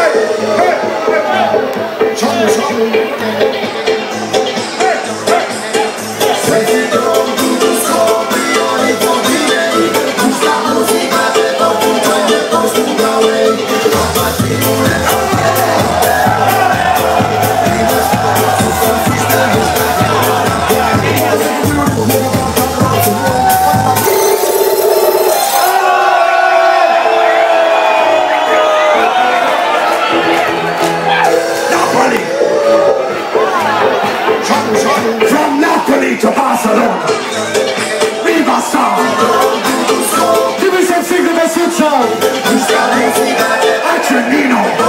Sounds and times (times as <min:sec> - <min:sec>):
Music: 0:00.0 - 0:44.8.